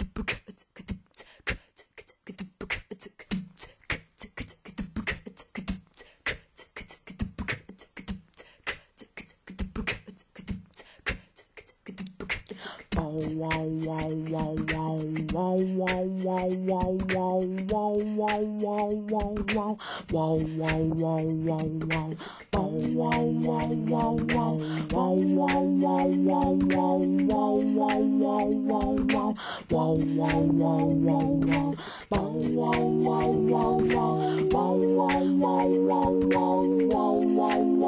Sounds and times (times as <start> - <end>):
Music: 2.3 - 37.8.